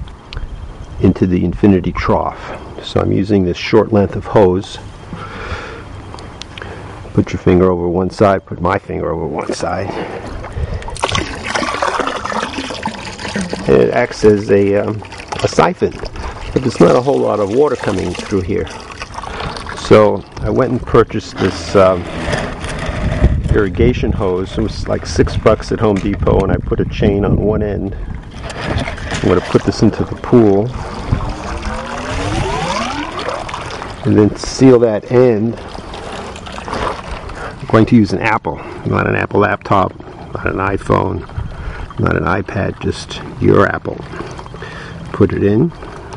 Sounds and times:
Speech: 1.0 - 4.8, 7.2 - 10.0, 13.6 - 16.0, 16.6 - 18.7, 19.8 - 22.0, 23.5 - 28.0, 29.2 - 30.8, 34.0 - 35.6, 37.6 - 41.3, 42.0 - 44.0, 45.1 - 45.8.

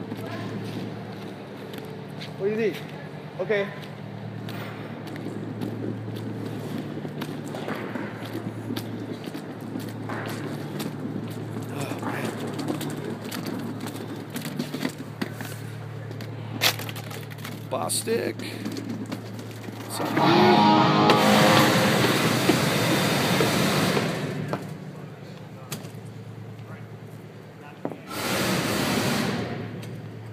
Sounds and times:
Speech: 2.4 - 3.8, 17.7 - 18.6, 27.6 - 28.1.

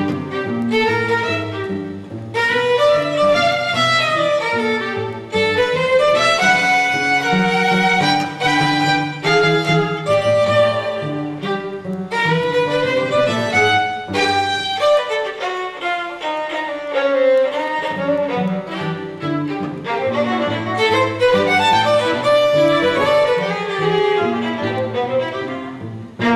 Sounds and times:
Cello: 0.0 - 26.3
Violin, fiddle: 0.0 - 26.3.

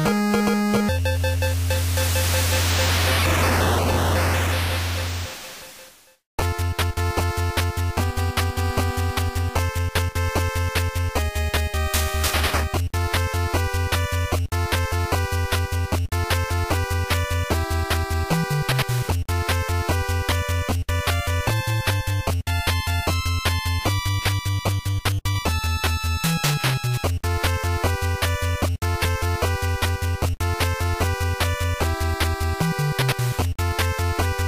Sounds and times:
Video game music: 0.0 - 34.4.

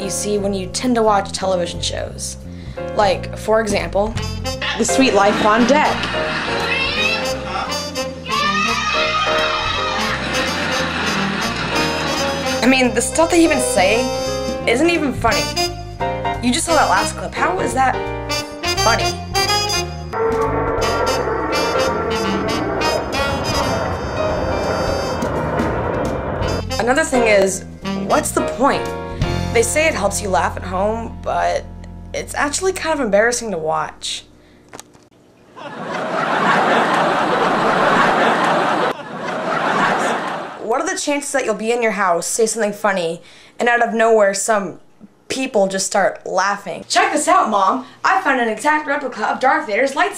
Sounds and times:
Speech: 0.0 - 2.4, 3.0 - 4.2, 4.8 - 6.0, 12.6 - 15.6, 16.4 - 18.0, 26.8 - 28.9, 29.5 - 34.3, 40.6 - 50.1
Music: 0.0 - 34.4.

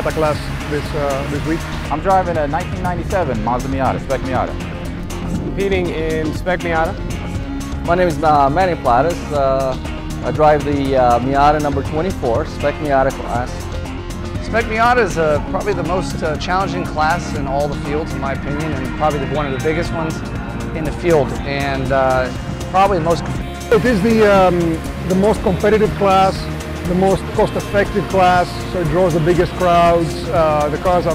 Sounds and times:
Speech: 0.0 - 4.6, 5.6 - 7.0, 7.9 - 13.6, 14.4 - 20.2, 20.8 - 31.1
Music: 0.0 - 31.1.

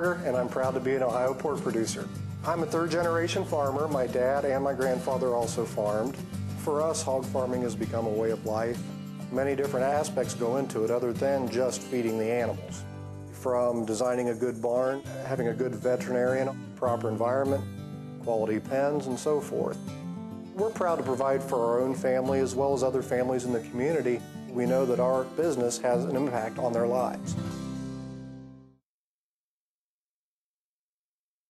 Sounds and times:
Speech: 0.0 - 12.8, 13.4 - 17.6, 18.3 - 19.8, 20.6 - 27.4
Music: 0.0 - 28.8.

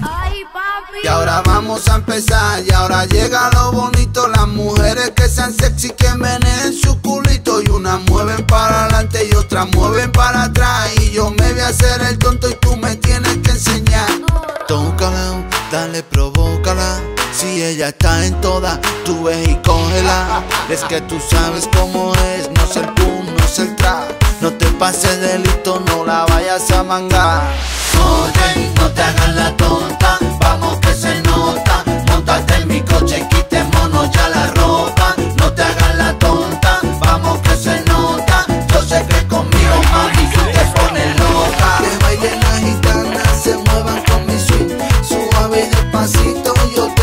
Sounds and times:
Music of Africa: 1.0 - 47.0.

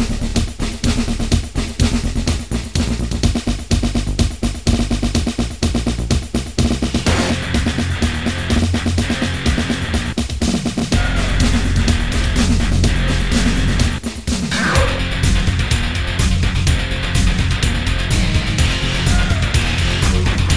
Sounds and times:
Background music: 0.0 - 20.5.

